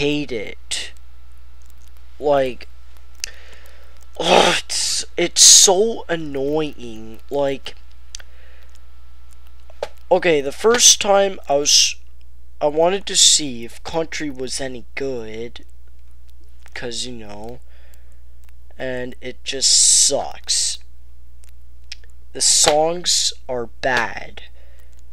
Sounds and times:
Speech: 0:00.0 - 0:01.0, 0:02.2 - 0:02.7, 0:04.2 - 0:07.8, 0:10.1 - 0:12.0, 0:12.6 - 0:15.7, 0:16.8 - 0:17.6, 0:18.8 - 0:20.8, 0:22.4 - 0:24.5.

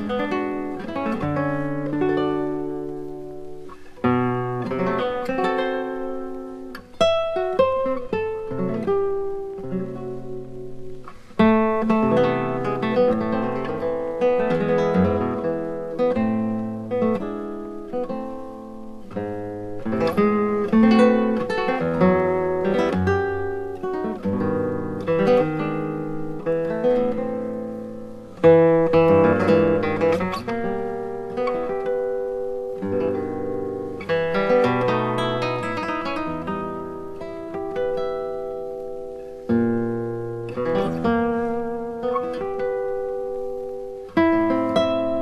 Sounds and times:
Acoustic guitar: 0:00.0 - 0:45.2
Strum: 0:00.0 - 0:45.2.

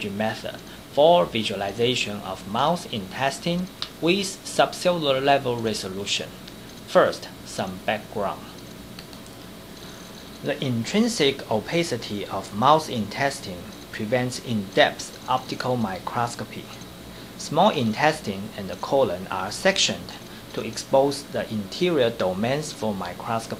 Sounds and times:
Speech: 0:00.0 - 0:08.6, 0:10.4 - 0:16.8, 0:17.4 - 0:23.5.

